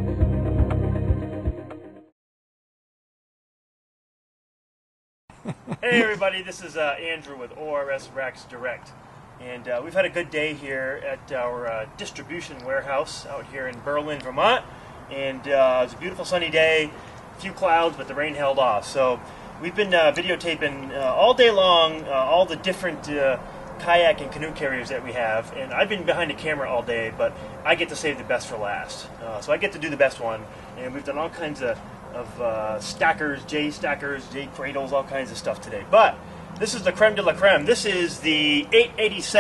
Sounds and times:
Speech: 5.8s - 39.4s.

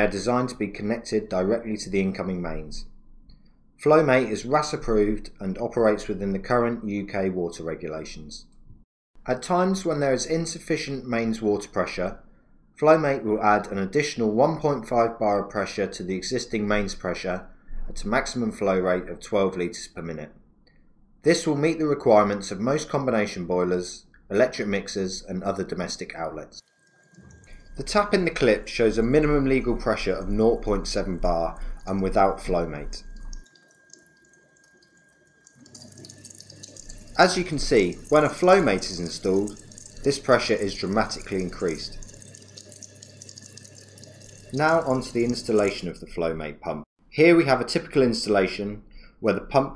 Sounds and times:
Speech: 0.0s - 2.9s, 3.8s - 8.5s, 9.3s - 12.2s, 12.8s - 20.4s, 21.2s - 26.6s, 27.8s - 33.1s, 37.2s - 42.0s, 44.6s - 49.7s.

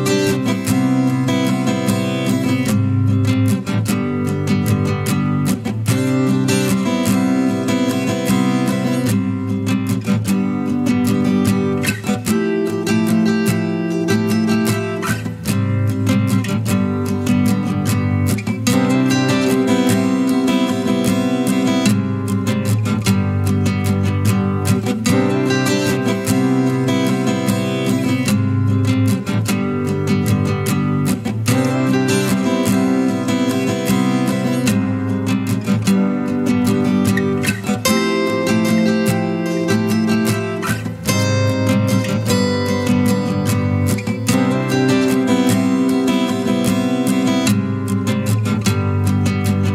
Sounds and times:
Music: 0.0s - 49.7s.

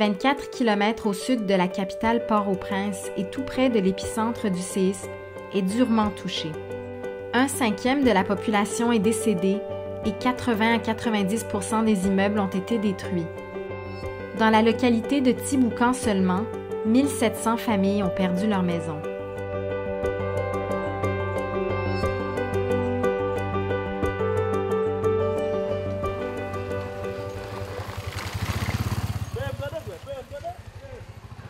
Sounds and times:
Speech: 0.0s - 5.0s, 5.6s - 6.6s, 7.4s - 13.3s, 14.4s - 19.0s, 29.4s - 31.0s
Music: 0.0s - 28.3s.

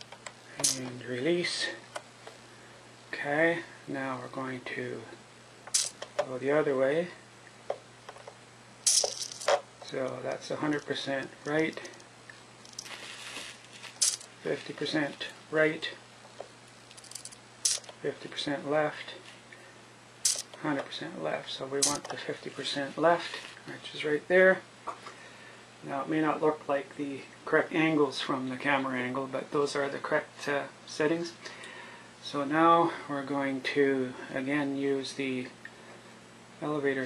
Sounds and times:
Speech: 0.6s - 1.8s, 3.1s - 5.2s, 6.2s - 7.2s, 9.8s - 11.9s, 14.4s - 16.0s, 18.0s - 19.2s, 20.6s - 24.7s, 25.8s - 31.4s, 32.2s - 35.6s, 36.6s - 37.0s.

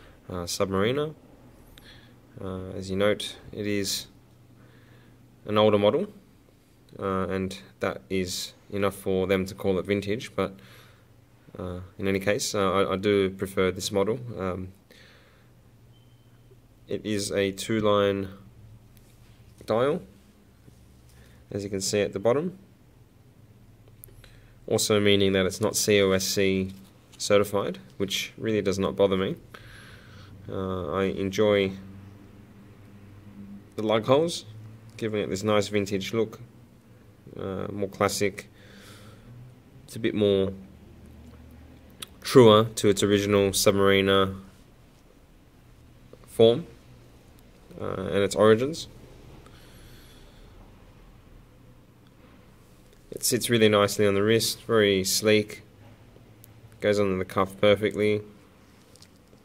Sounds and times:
Speech: 0.3s - 1.2s, 2.4s - 4.2s, 5.4s - 6.2s, 6.9s - 10.6s, 11.5s - 14.8s, 16.9s - 18.5s, 19.6s - 20.2s, 21.5s - 22.7s, 24.7s - 29.4s, 30.5s - 31.9s, 33.8s - 36.5s, 37.3s - 38.5s, 39.9s - 40.7s, 42.0s - 44.5s, 46.2s - 46.8s, 47.7s - 49.0s, 53.1s - 55.7s, 56.8s - 58.4s.

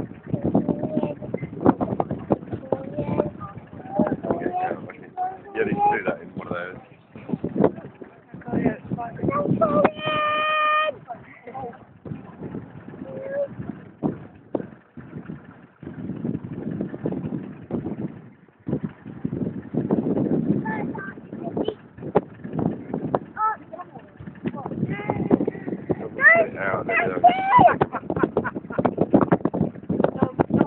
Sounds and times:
Vehicle: 0.0s - 30.6s.

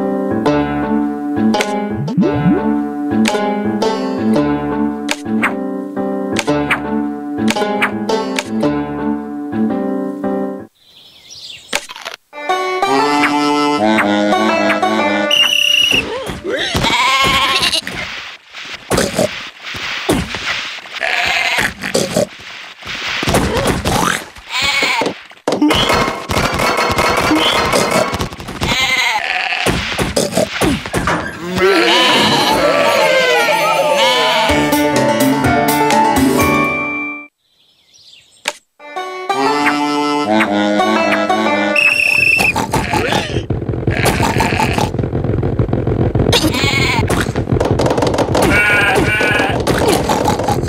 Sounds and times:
Bleat: 16.6s - 17.9s, 21.0s - 21.8s, 24.5s - 25.2s, 28.7s - 29.8s, 31.4s - 34.6s, 42.4s - 45.0s, 46.4s - 47.1s, 48.4s - 49.6s.

